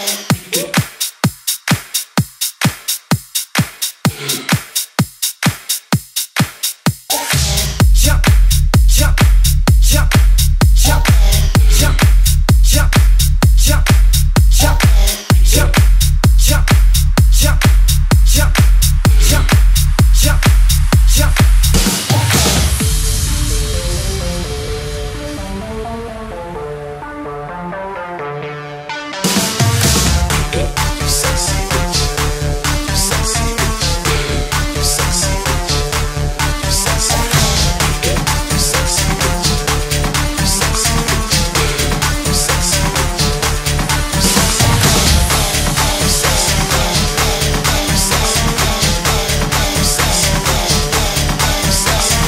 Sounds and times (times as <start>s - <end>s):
Electronic dance music: 0.0s - 52.2s.